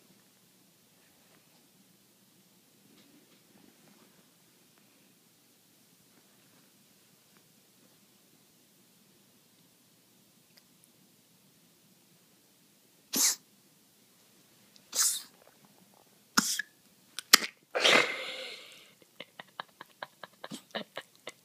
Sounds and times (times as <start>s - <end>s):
Cough: 17.8s - 18.2s.